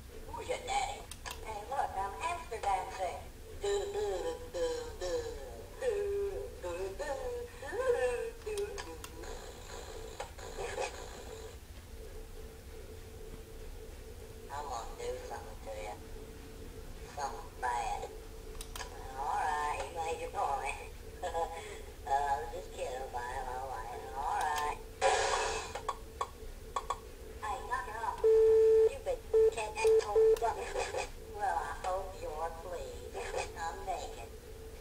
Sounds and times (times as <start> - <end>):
Speech: 0.3 - 9.3, 14.5 - 16.0, 17.1 - 18.1, 18.9 - 24.8, 27.4 - 28.2, 28.8 - 34.4.